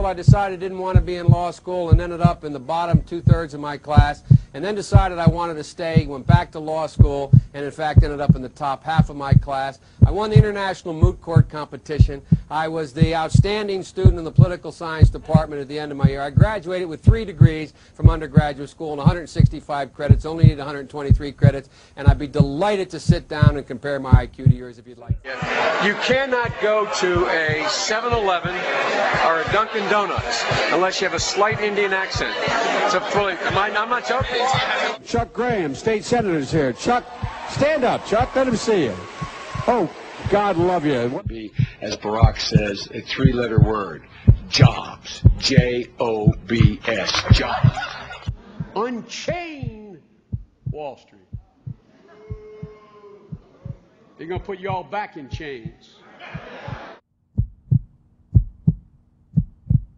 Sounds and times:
Heart sounds, heartbeat: 0.0 - 0.4, 1.0 - 5.4, 6.0 - 25.6, 41.3 - 45.7, 46.3 - 48.8, 49.6 - 53.8, 56.4 - 59.9
Speech: 0.0 - 50.0, 50.7 - 51.2, 54.1 - 56.0.

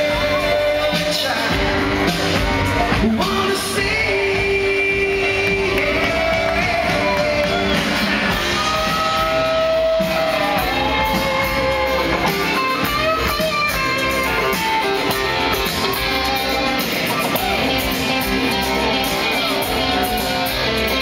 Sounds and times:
Rock and roll: 0.0 - 21.0.

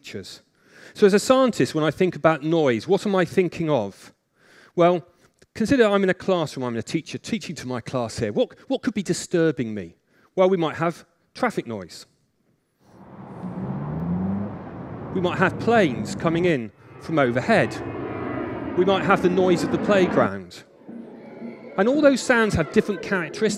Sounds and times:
Speech: 0.0 - 0.4, 1.0 - 4.1, 4.8 - 12.1, 15.2 - 17.8, 18.8 - 20.6, 21.8 - 23.5
Whir: 12.9 - 23.5.

